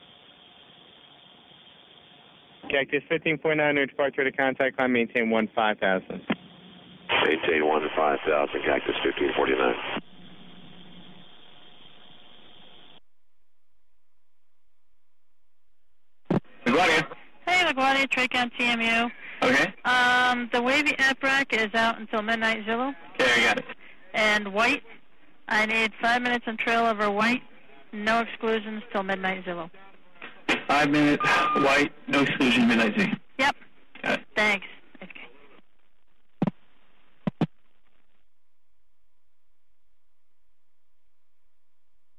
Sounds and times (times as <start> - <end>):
Speech: 2.7 - 6.3, 7.1 - 10.0, 16.6 - 24.8, 30.7 - 35.4.